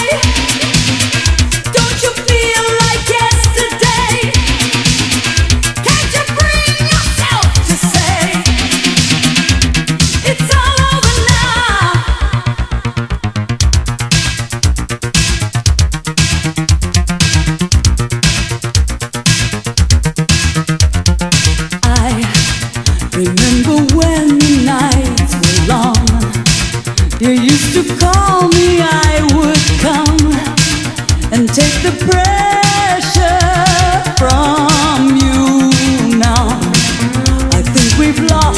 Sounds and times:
Disco: 0.0s - 38.5s.

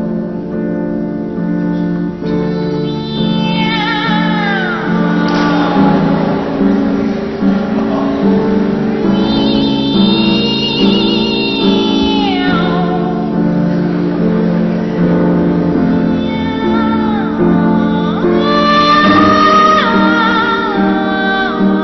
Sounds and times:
Music: 0.0s - 21.8s.

